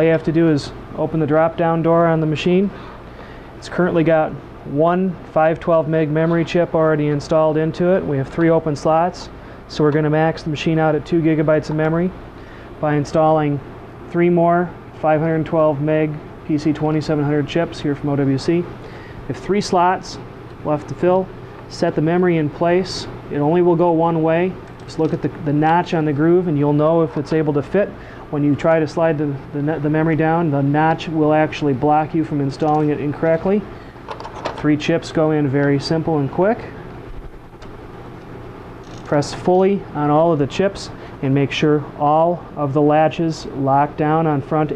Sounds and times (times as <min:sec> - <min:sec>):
Speech: 0:00.0 - 0:02.8, 0:03.6 - 0:12.2, 0:12.8 - 0:18.7, 0:19.3 - 0:33.7, 0:34.6 - 0:36.8, 0:39.1 - 0:44.7.